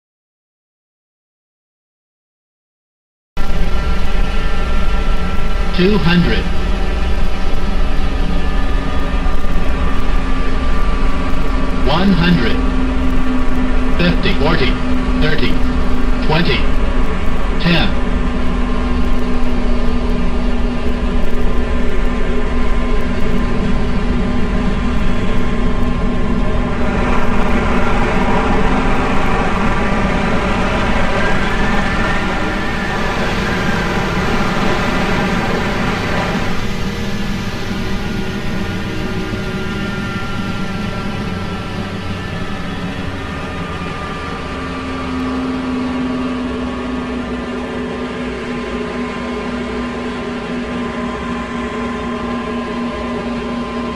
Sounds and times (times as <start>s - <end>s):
Aircraft: 3.4s - 53.9s.